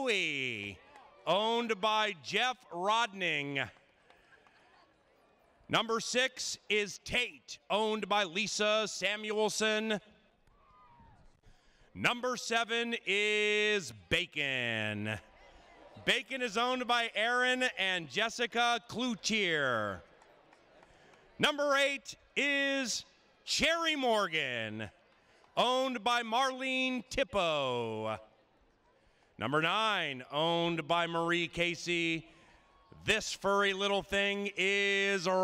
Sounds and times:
Speech: 0.0s - 3.7s, 5.7s - 10.1s, 12.0s - 15.2s, 16.0s - 20.0s, 21.4s - 24.9s, 25.6s - 28.2s, 29.4s - 32.3s, 33.0s - 35.4s.

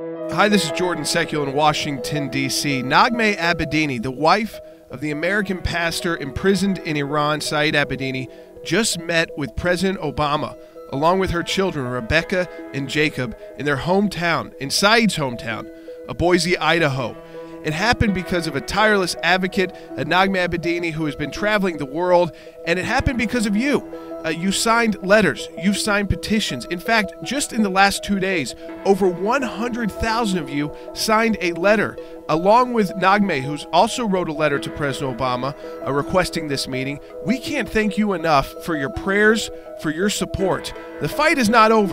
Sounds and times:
Music: 0.0s - 41.9s
Speech: 0.3s - 41.9s.

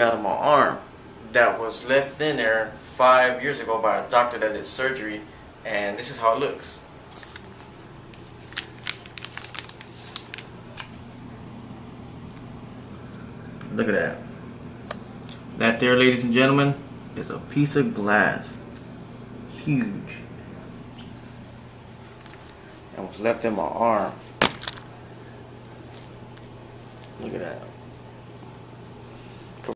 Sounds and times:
Speech: 0.0s - 6.9s, 13.6s - 14.3s, 15.6s - 18.6s, 19.5s - 20.3s, 22.9s - 24.2s, 27.2s - 27.8s.

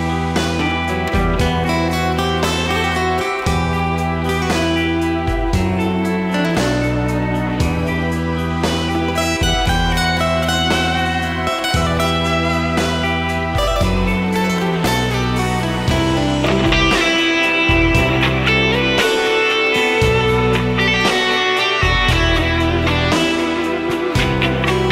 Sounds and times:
Music: 0.0s - 24.9s.

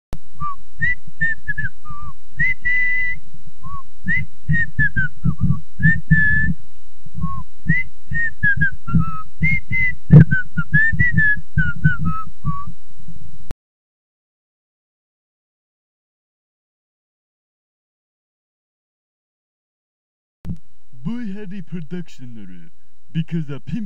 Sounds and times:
Whistling: 0.4s - 6.6s, 7.2s - 12.7s.

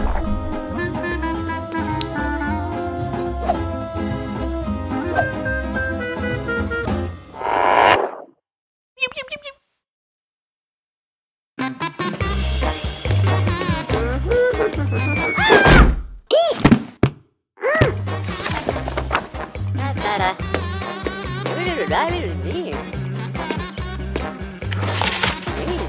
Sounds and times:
Music: 0.0s - 7.3s, 11.6s - 15.7s, 17.8s - 25.8s
Speech: 9.0s - 9.6s, 16.3s - 16.6s, 21.5s - 22.9s.

